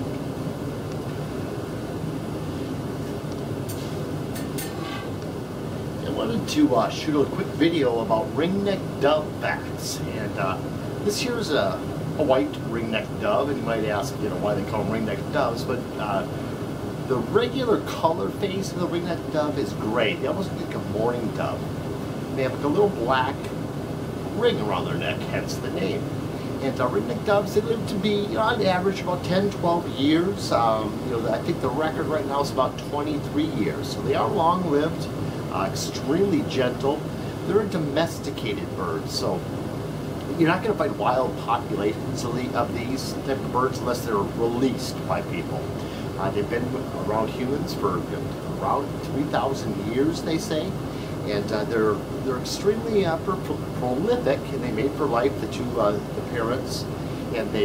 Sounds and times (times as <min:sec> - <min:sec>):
Speech: 0:06.0 - 0:16.4, 0:17.0 - 0:21.7, 0:22.3 - 0:23.6, 0:24.3 - 0:39.5, 0:40.2 - 0:57.6.